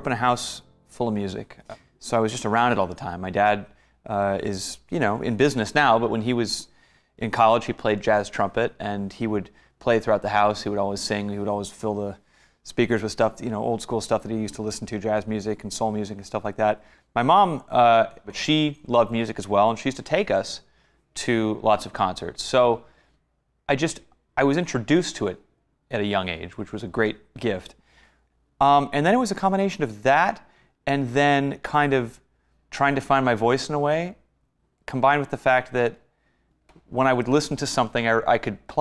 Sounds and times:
Speech: 0:00.0 - 0:22.9, 0:23.7 - 0:27.8, 0:28.6 - 0:36.1, 0:36.9 - 0:38.8.

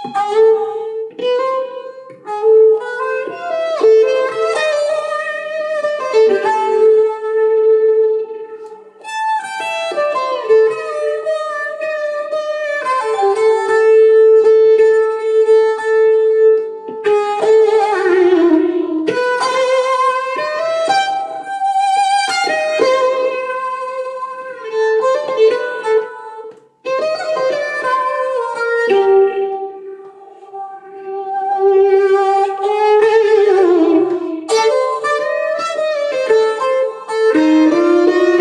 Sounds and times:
Inside, small room: 0:00.0 - 0:38.4
Violin, fiddle: 0:00.0 - 0:38.4.

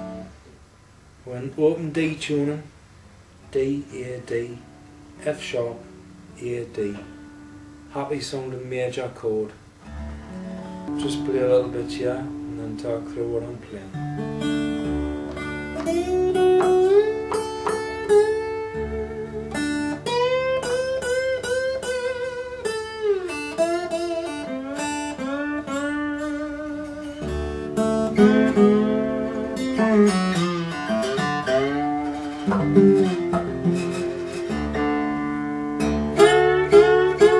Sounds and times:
Acoustic guitar: 0:00.0 - 0:00.6, 0:01.4 - 0:37.3
Blues: 0:09.6 - 0:37.3.

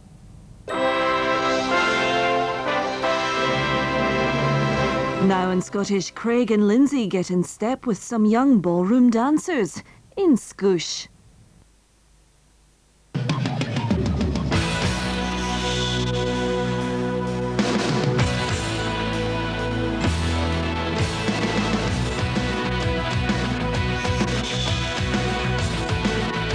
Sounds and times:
Music: 0:00.7 - 0:06.2, 0:13.1 - 0:26.5
Television: 0:00.7 - 0:26.5.

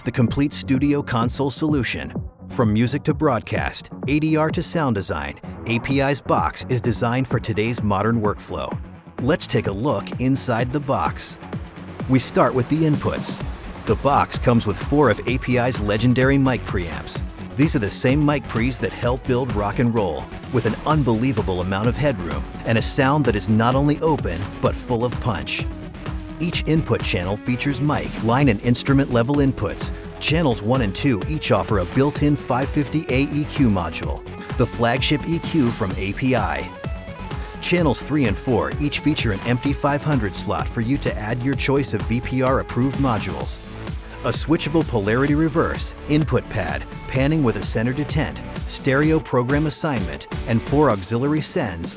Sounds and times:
Speech: 0:00.0 - 0:11.4, 0:12.1 - 0:25.7, 0:26.4 - 0:36.8, 0:37.6 - 0:43.6, 0:44.2 - 0:51.9
Music: 0:00.0 - 0:51.9.

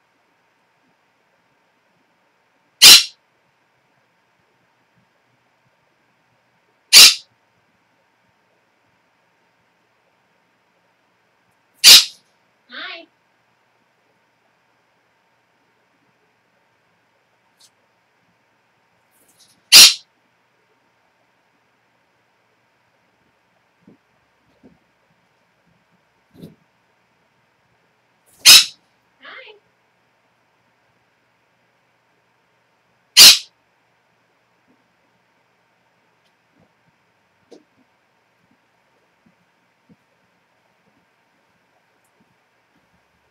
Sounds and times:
Speech: 0:12.7 - 0:13.1, 0:29.2 - 0:29.6.

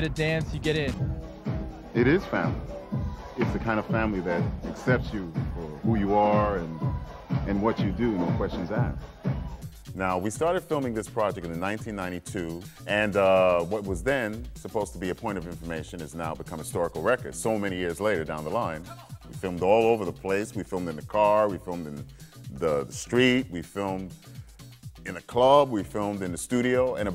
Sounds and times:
Music: 0:00.0 - 0:27.1
Speech: 0:03.4 - 0:06.8, 0:07.5 - 0:09.0, 0:10.0 - 0:24.1, 0:25.1 - 0:27.1.

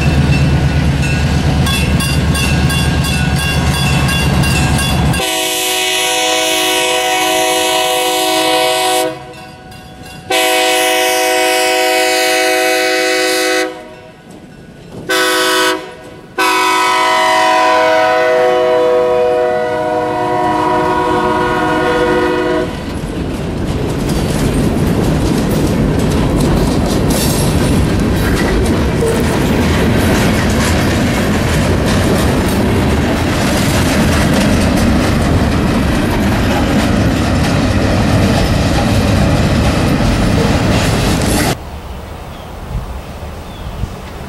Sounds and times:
Railroad car, train wagon: 0:00.0 - 0:44.2
Train horn: 0:05.2 - 0:09.4, 0:10.3 - 0:14.1, 0:15.1 - 0:22.9
Clickety-clack: 0:22.8 - 0:41.6.

